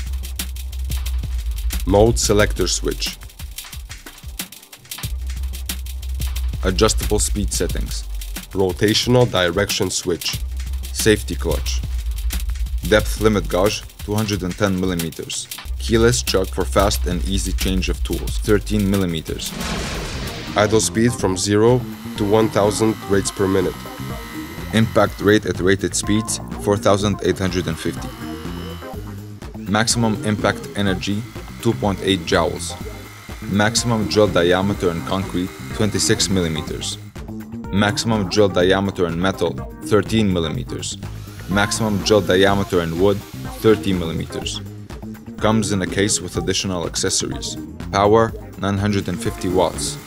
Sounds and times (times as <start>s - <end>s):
Music: 0.0s - 50.0s
Speech: 1.8s - 3.2s, 6.6s - 11.8s, 12.8s - 19.6s, 20.5s - 23.9s, 24.7s - 28.1s, 29.6s - 32.8s, 33.4s - 37.0s, 37.7s - 44.7s, 45.4s - 50.0s.